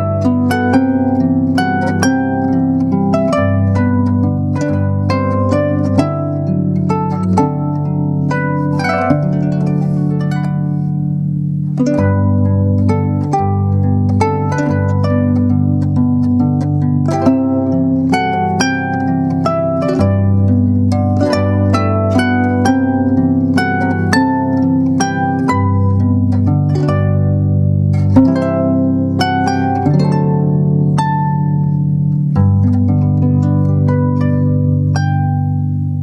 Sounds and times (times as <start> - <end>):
Harp: 0.0 - 36.0.